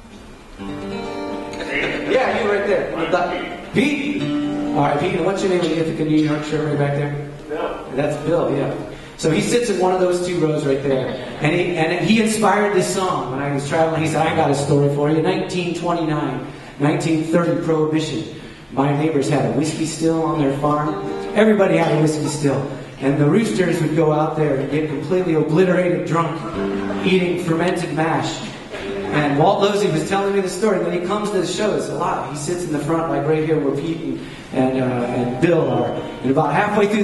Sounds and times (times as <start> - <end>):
Music: 0.0 - 10.2, 20.2 - 22.8, 26.0 - 28.0, 28.7 - 30.4, 35.0 - 37.0
Speech: 1.6 - 4.2, 4.8 - 37.0.